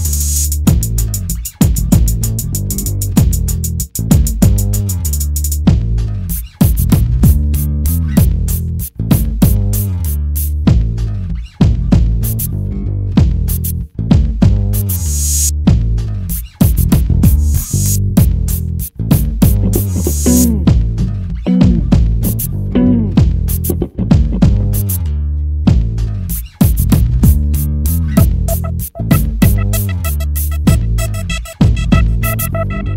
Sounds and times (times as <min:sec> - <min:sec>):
Music: 0:00.0 - 0:32.9.